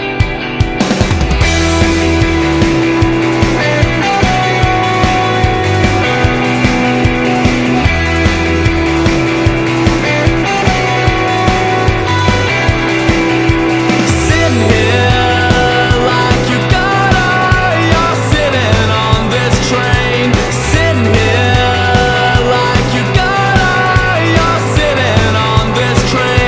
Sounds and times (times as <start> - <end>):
Music: 0.0 - 26.4.